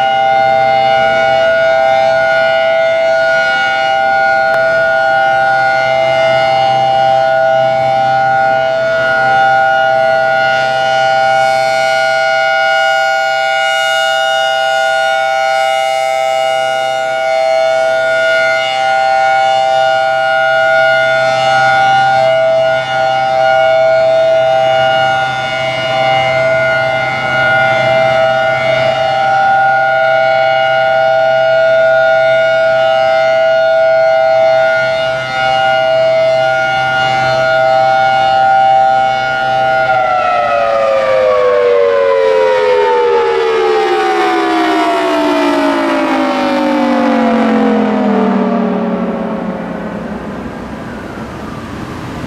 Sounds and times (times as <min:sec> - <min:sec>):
Civil defense siren: 0:00.0 - 0:52.2.